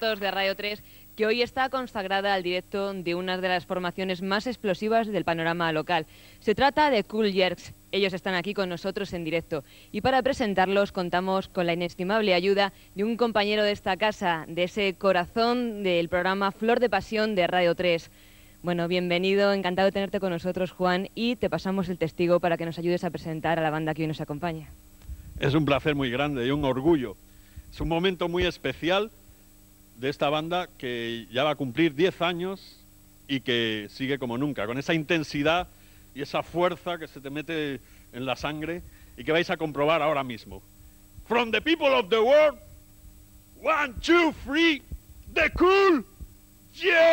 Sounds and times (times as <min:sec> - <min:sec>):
Speech: 0:00.0 - 0:18.1, 0:25.4 - 0:29.2, 0:30.0 - 0:40.6, 0:41.3 - 0:42.6, 0:43.6 - 0:46.0.